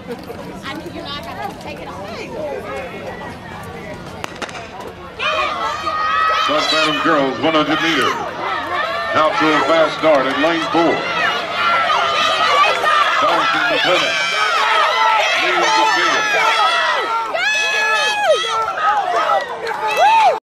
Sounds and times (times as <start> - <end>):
Outside, urban or manmade: 0.0 - 20.4
Run: 0.0 - 20.4.